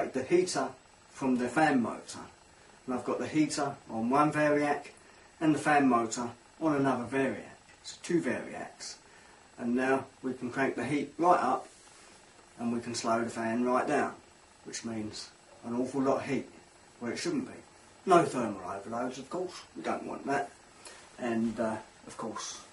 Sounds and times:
Speech: 0:00.0 - 0:09.0, 0:09.6 - 0:11.7, 0:12.6 - 0:20.6, 0:21.2 - 0:22.7.

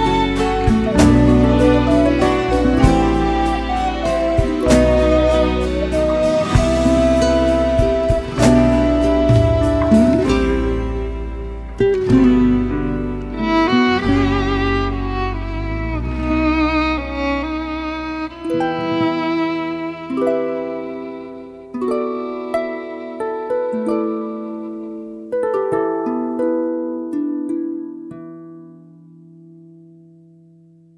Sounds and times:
Sad music: 0:00.0 - 0:28.1.

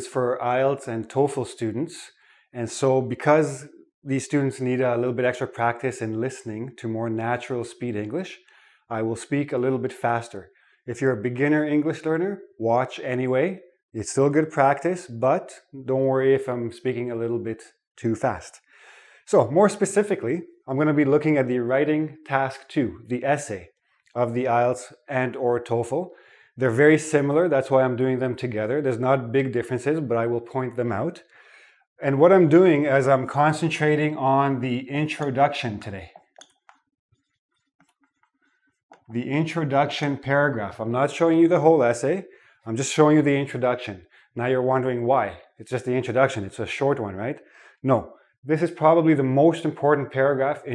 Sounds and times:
Speech: 0:00.0 - 0:18.6, 0:19.3 - 0:31.3, 0:32.0 - 0:36.2, 0:39.1 - 0:50.7.

